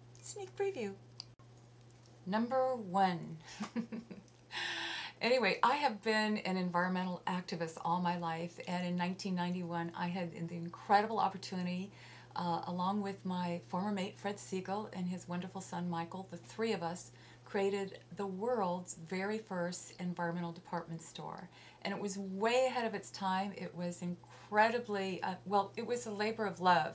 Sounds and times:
Speech: 0:00.2 - 0:01.0, 0:02.3 - 0:03.4, 0:05.2 - 0:26.9.

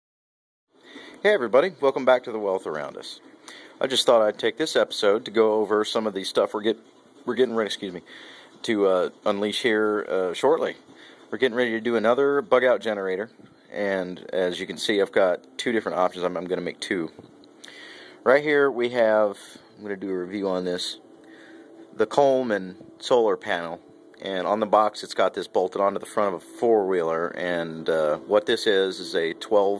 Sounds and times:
Inside, small room: 0:00.7 - 0:29.7
Speech: 0:01.2 - 0:17.2, 0:18.2 - 0:21.0, 0:22.0 - 0:29.7.

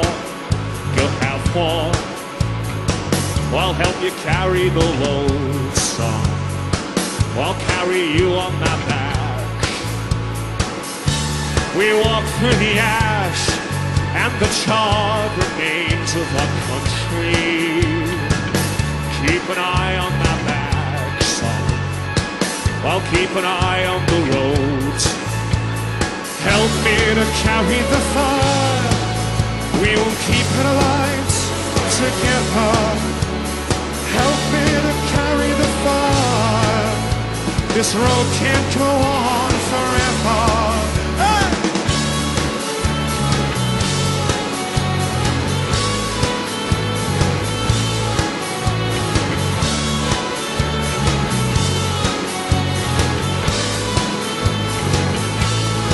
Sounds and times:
Music: 0:00.0 - 0:55.9.

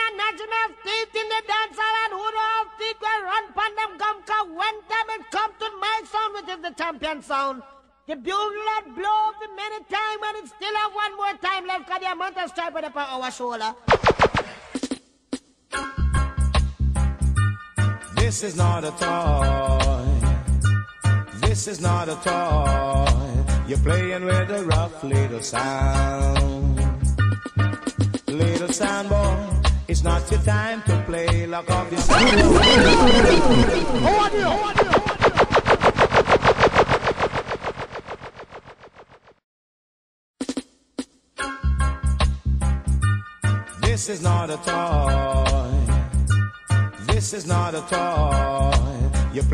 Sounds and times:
Music: 0:14.8 - 0:34.3, 0:40.4 - 0:49.5.

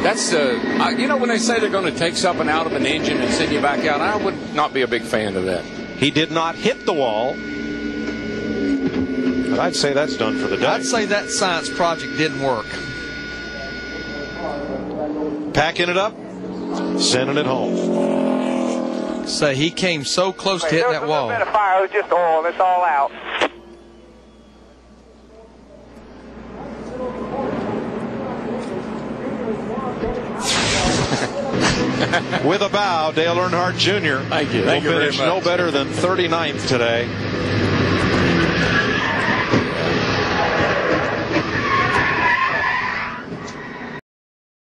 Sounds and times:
Medium engine (mid frequency): 0:00.0 - 0:20.7, 0:23.6 - 0:44.0
Car: 0:00.0 - 0:21.3, 0:25.9 - 0:44.0
Accelerating, revving, vroom: 0:16.6 - 0:19.4, 0:33.2 - 0:41.5.

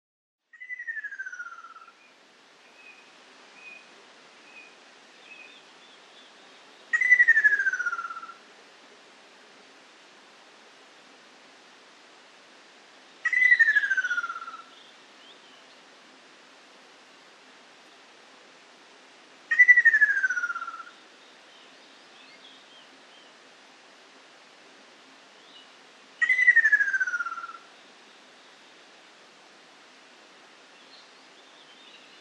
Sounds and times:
Bird: 0:00.5 - 0:08.4, 0:13.2 - 0:15.8, 0:19.5 - 0:23.4, 0:25.4 - 0:28.6.

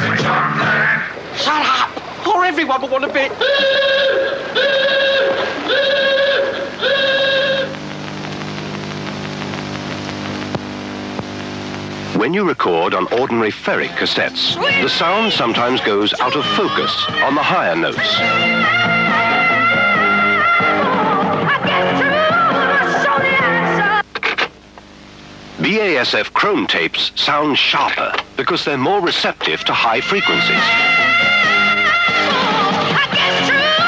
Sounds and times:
Music: 0:00.0 - 0:01.2, 0:13.8 - 0:24.0, 0:29.6 - 0:33.8
Television: 0:00.0 - 0:33.8
Speech: 0:01.4 - 0:03.4, 0:12.2 - 0:18.1, 0:25.6 - 0:30.6.

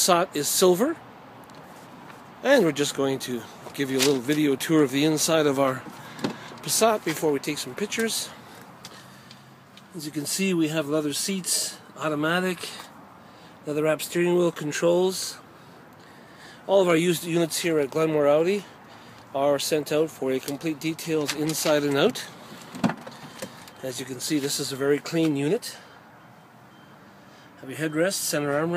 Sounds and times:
Speech: 0:00.0 - 0:01.0, 0:02.4 - 0:05.8, 0:06.6 - 0:08.4, 0:09.9 - 0:12.9, 0:13.7 - 0:15.4, 0:16.7 - 0:18.7, 0:19.4 - 0:22.3, 0:23.8 - 0:25.8, 0:27.6 - 0:28.7.

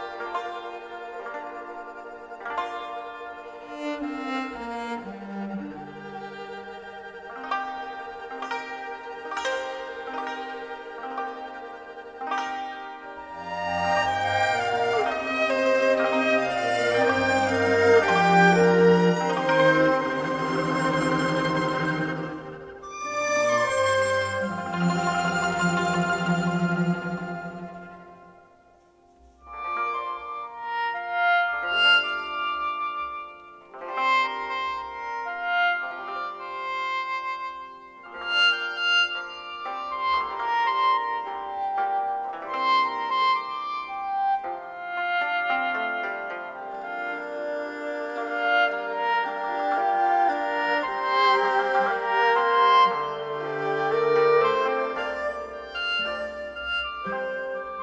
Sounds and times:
Bowed string instrument: 0:00.0 - 0:57.8
Inside, large room or hall: 0:00.0 - 0:57.8
Orchestra: 0:00.0 - 0:57.8.

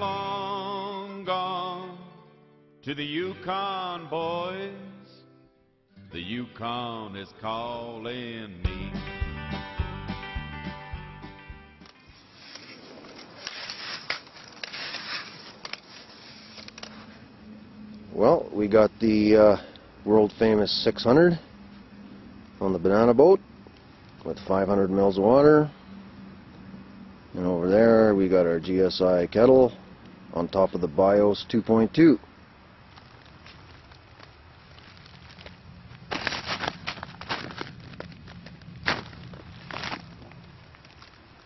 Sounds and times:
Speech: 0:18.1 - 0:21.5, 0:22.6 - 0:23.4, 0:24.2 - 0:25.7, 0:27.3 - 0:32.2.

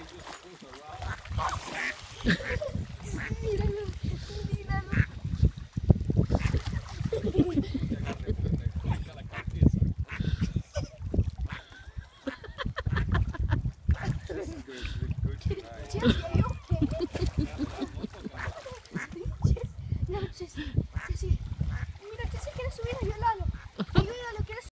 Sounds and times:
Quack: 0:01.0 - 0:02.6, 0:04.9 - 0:05.2, 0:06.3 - 0:06.7, 0:11.4 - 0:11.7, 0:13.9 - 0:14.2, 0:18.4 - 0:19.2, 0:21.7 - 0:21.9
Speech: 0:22.0 - 0:24.7.

